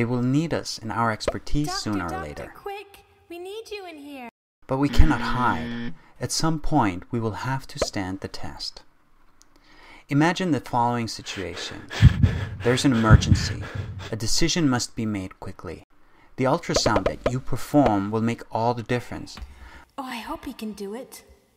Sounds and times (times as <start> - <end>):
Speech: 0.0 - 5.6, 6.2 - 8.8, 10.1 - 11.9, 12.6 - 15.8, 16.4 - 19.4, 20.0 - 21.3.